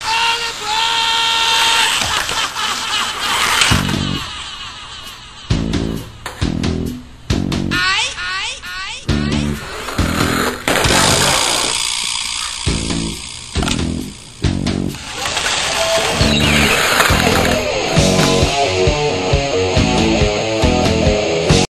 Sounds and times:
Music: 3.6s - 8.2s, 8.8s - 11.7s, 12.6s - 21.7s.

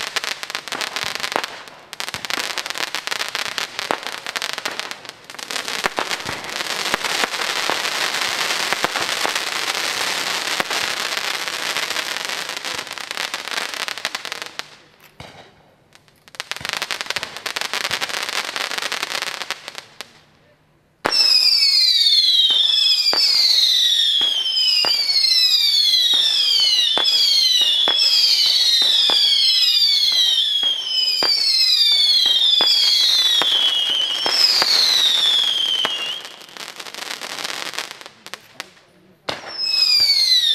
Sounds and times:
Fireworks: 0.0s - 40.5s
Speech: 14.0s - 15.7s, 20.2s - 20.8s, 38.0s - 40.1s.

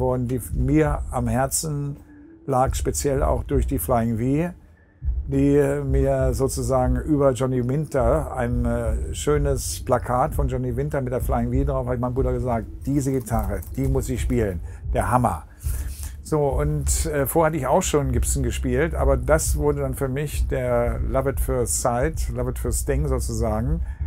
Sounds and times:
Speech: 0.0s - 4.6s, 5.3s - 15.5s, 16.2s - 23.9s.

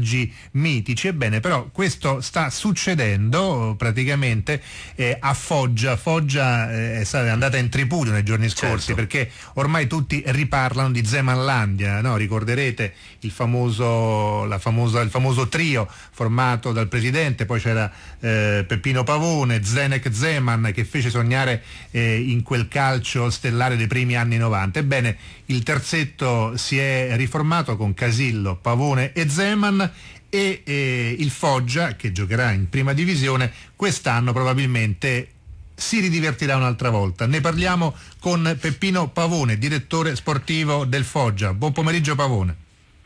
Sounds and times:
Speech: 0.0s - 42.6s.

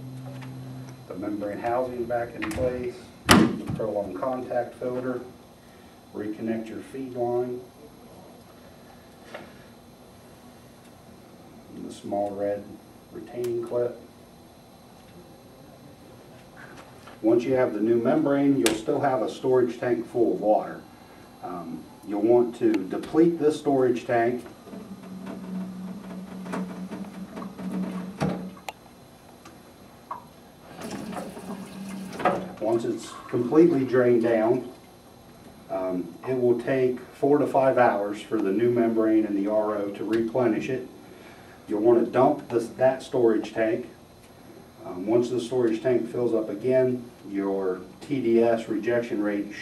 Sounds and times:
Speech: 1.1s - 5.4s, 6.1s - 8.3s, 11.7s - 14.1s, 17.2s - 20.8s, 21.4s - 24.5s, 32.6s - 34.8s, 35.7s - 40.9s, 41.7s - 44.0s, 44.8s - 49.6s.

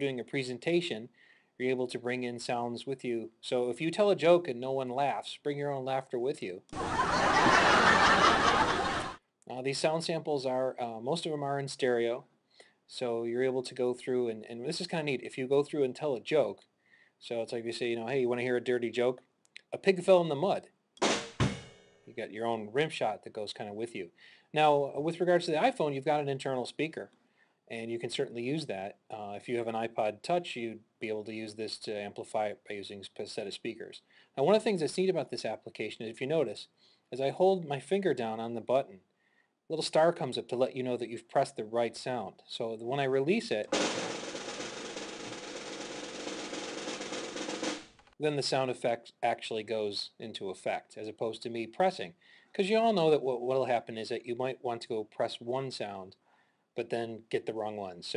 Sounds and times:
Speech: 0.0s - 6.7s, 9.4s - 12.3s, 12.9s - 20.8s, 22.1s - 39.1s, 39.7s - 43.8s, 48.2s - 56.2s, 56.8s - 58.1s
Music: 21.0s - 22.0s, 44.0s - 47.9s.

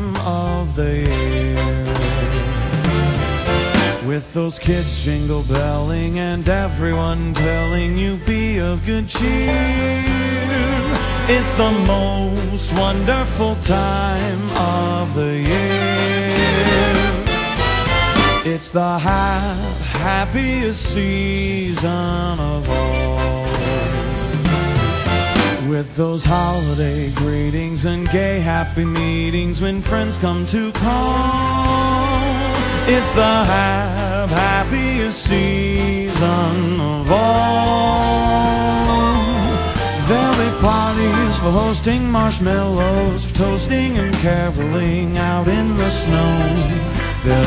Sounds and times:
Music: 0.0s - 47.4s.

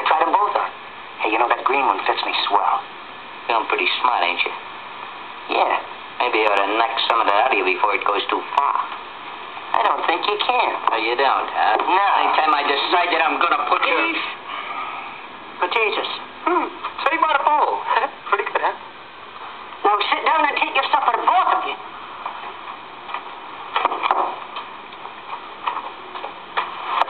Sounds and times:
Speech: 0.0s - 2.9s, 3.5s - 4.6s, 5.5s - 9.0s, 9.7s - 14.4s, 15.6s - 18.8s, 19.8s - 21.8s.

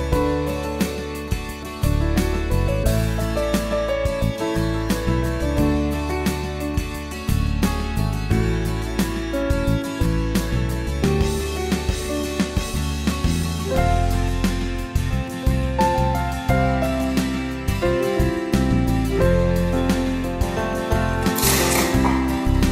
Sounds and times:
Music: 0.0s - 22.7s.

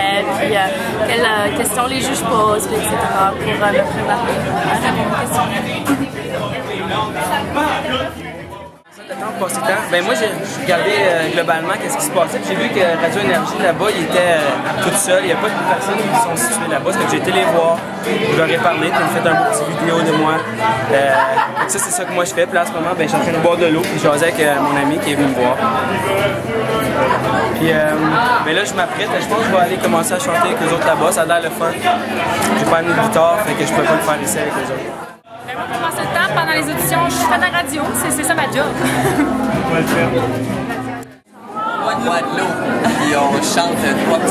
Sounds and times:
Music: 0.0s - 41.3s.

